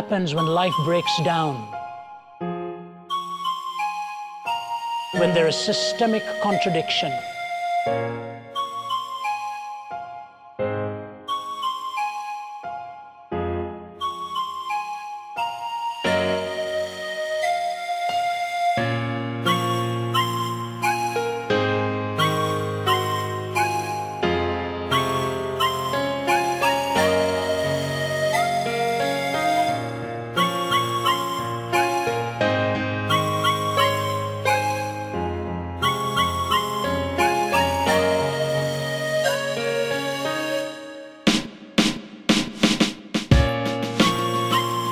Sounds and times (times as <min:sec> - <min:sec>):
Sad music: 0:00.0 - 0:41.3, 0:43.3 - 0:44.9.